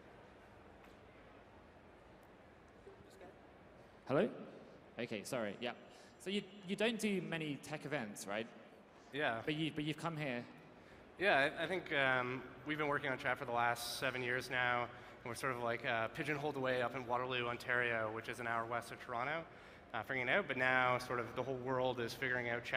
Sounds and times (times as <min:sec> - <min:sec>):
Speech: 0:04.1 - 0:04.4, 0:05.0 - 0:08.5, 0:09.1 - 0:10.6, 0:11.2 - 0:22.7.